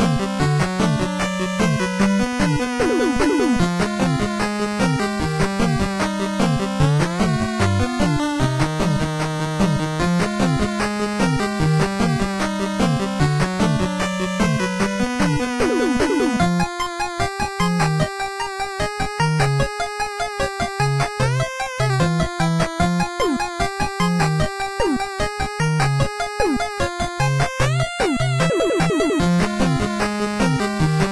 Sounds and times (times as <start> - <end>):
Video game music: 0.0 - 31.1.